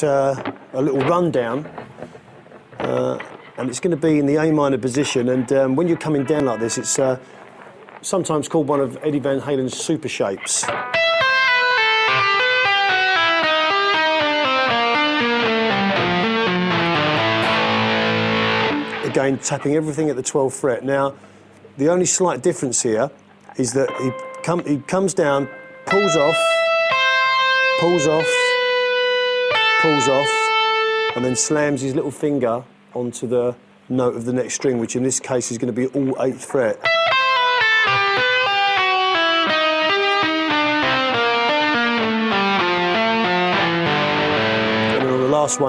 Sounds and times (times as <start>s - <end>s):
Speech: 0.0s - 1.7s, 2.8s - 7.2s, 8.0s - 10.7s, 19.0s - 21.2s, 21.8s - 26.6s, 27.8s - 28.5s, 29.8s - 30.5s, 31.2s - 36.9s, 45.0s - 45.6s
Music: 10.6s - 19.2s, 23.9s - 31.8s, 36.8s - 45.6s.